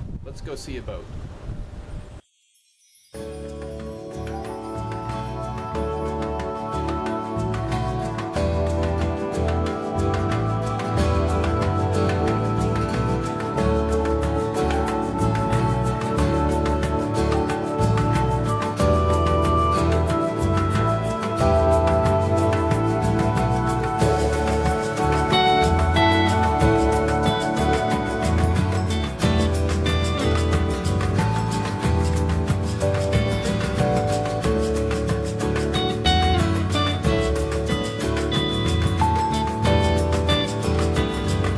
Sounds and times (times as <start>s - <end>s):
Music: 2.2s - 41.5s.